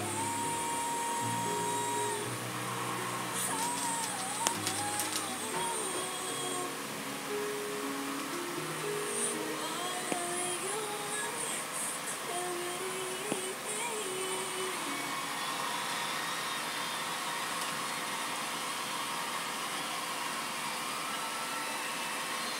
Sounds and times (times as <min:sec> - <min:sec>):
Singing: 0:00.0 - 0:07.7, 0:09.0 - 0:17.3.